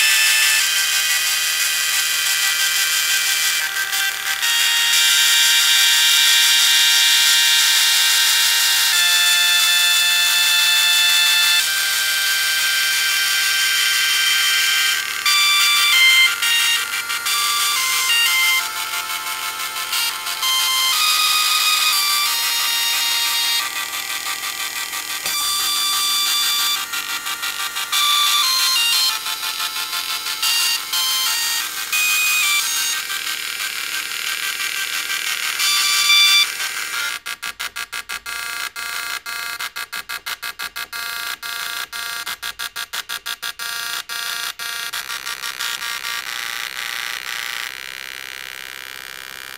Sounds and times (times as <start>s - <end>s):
Music: 0.0s - 37.2s
Printer: 0.0s - 49.5s.